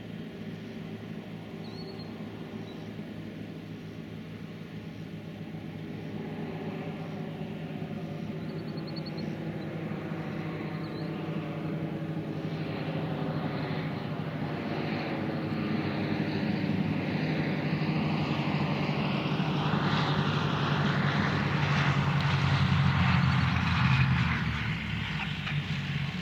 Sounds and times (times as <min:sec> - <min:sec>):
Fixed-wing aircraft, airplane: 0:00.0 - 0:26.2.